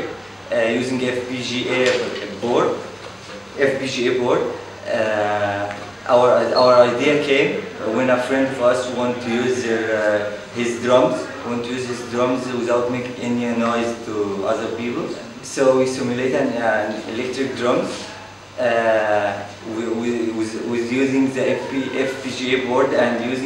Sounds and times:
Speech: 0.0s - 2.9s, 3.6s - 23.4s.

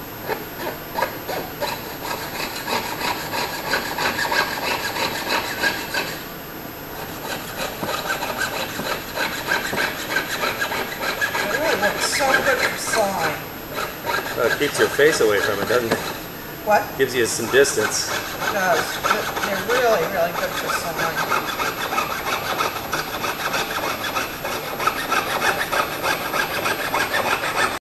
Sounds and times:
Sawing: 0.0s - 6.3s, 7.0s - 27.8s
Rub: 0.6s - 6.2s, 7.0s - 16.2s, 17.0s - 27.8s.

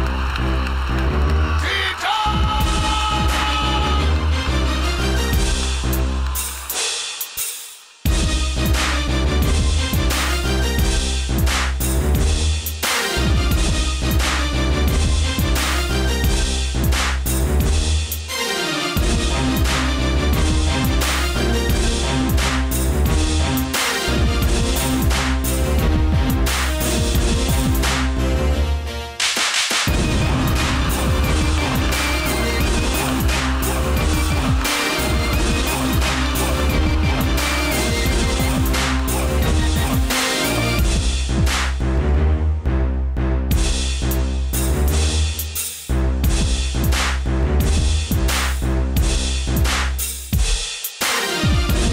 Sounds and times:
Background music: 0.0s - 49.9s, 51.0s - 51.9s
Exciting music: 0.0s - 50.0s, 51.0s - 51.9s.

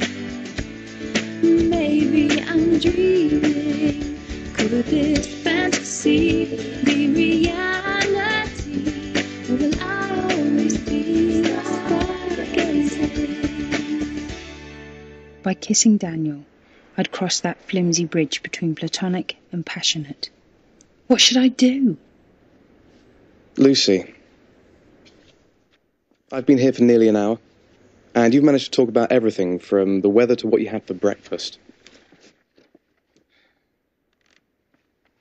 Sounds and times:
Speech: 15.5s - 20.3s, 23.6s - 24.2s, 26.3s - 27.4s, 28.2s - 31.6s.

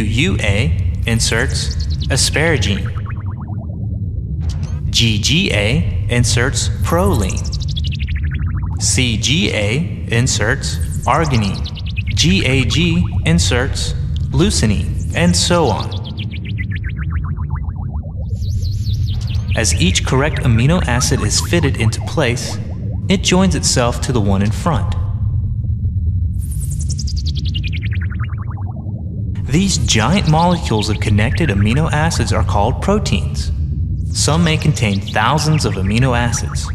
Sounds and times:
Chirp tone: 0.0s - 5.7s, 6.3s - 9.5s, 10.3s - 23.4s, 24.2s - 33.3s, 34.1s - 36.7s.

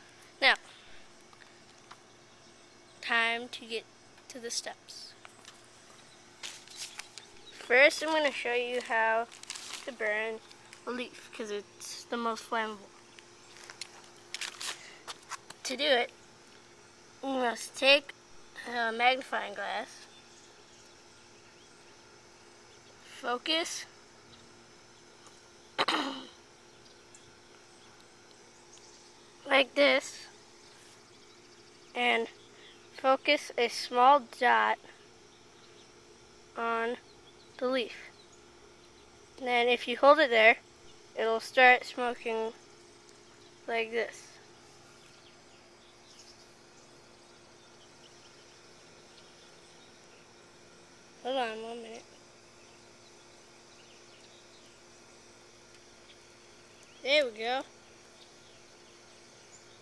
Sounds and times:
Environmental noise: 0.0s - 59.8s
Speech: 0.4s - 0.6s, 3.0s - 5.2s, 7.6s - 9.3s, 9.9s - 12.9s, 15.6s - 16.1s, 17.2s - 20.0s, 23.1s - 23.9s, 29.5s - 30.3s, 32.0s - 32.3s, 33.0s - 34.8s, 36.6s - 37.0s, 37.6s - 38.1s, 39.4s - 40.6s, 41.2s - 42.6s, 43.7s - 44.4s, 51.2s - 52.1s, 57.0s - 57.7s.

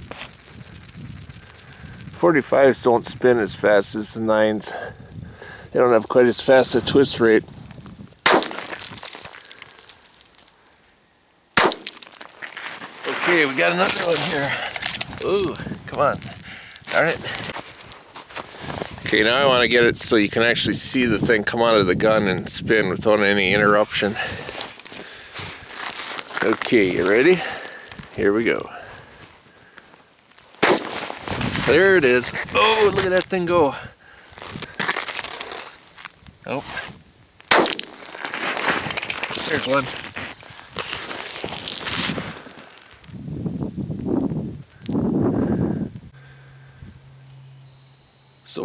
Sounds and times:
Outside, rural or natural: 0.0s - 48.6s
Speech: 2.2s - 4.9s, 5.8s - 7.4s, 13.1s - 14.6s, 15.2s - 16.2s, 19.1s - 24.3s, 26.4s - 27.6s, 28.2s - 28.8s, 31.7s - 33.9s, 36.5s - 36.8s, 39.4s - 39.9s.

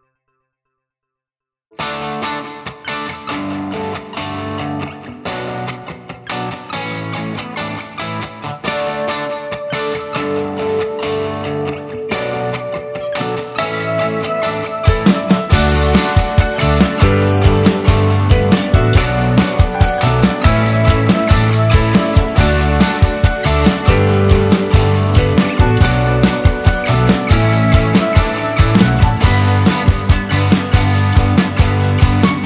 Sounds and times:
Effects unit: 0.0s - 1.2s, 1.8s - 32.4s
Music: 0.0s - 32.4s.

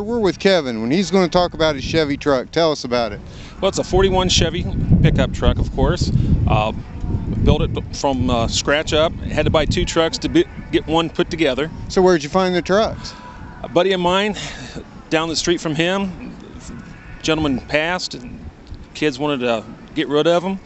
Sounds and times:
Speech: 0.0s - 6.8s, 7.4s - 14.4s, 15.1s - 18.4s, 19.0s - 20.6s.

